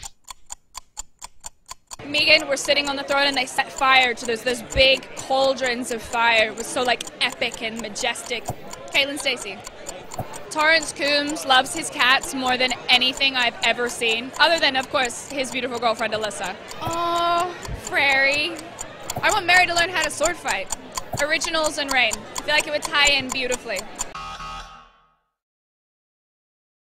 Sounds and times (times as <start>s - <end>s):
Tick-tock: 0.0s - 24.2s
Speech: 2.0s - 24.2s.